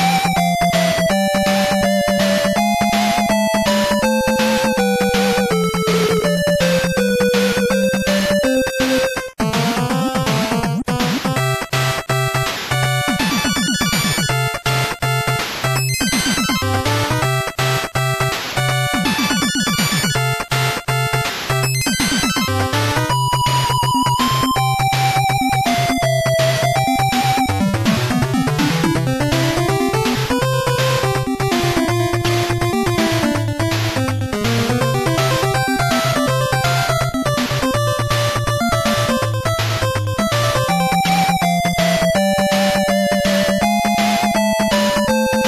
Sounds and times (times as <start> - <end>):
Music: 0.0 - 45.4.